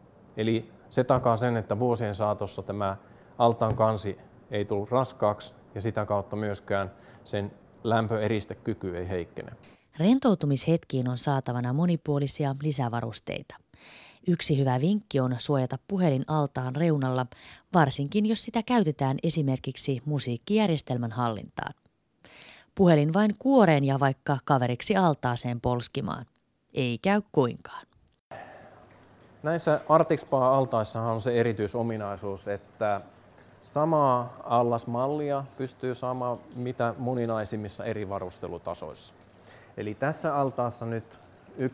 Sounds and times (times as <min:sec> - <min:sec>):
Speech: 0:29.4 - 0:33.1.